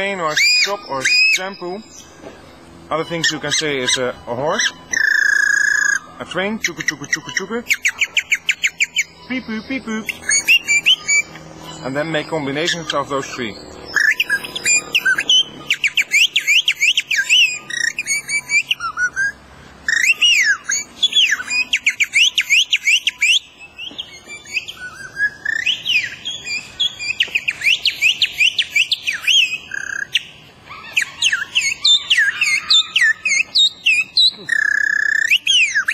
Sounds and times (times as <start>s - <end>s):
Male speech, man speaking: 0.0s - 1.9s, 2.9s - 4.8s, 6.2s - 7.7s, 9.3s - 10.2s, 11.8s - 13.6s.